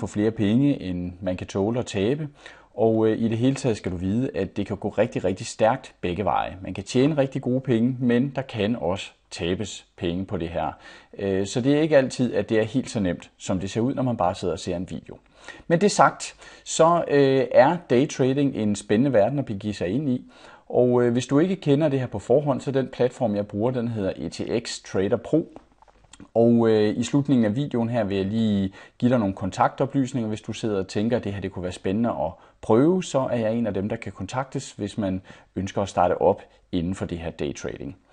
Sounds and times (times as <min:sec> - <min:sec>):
Speech: 0:00.0 - 0:25.6, 0:26.2 - 0:38.0.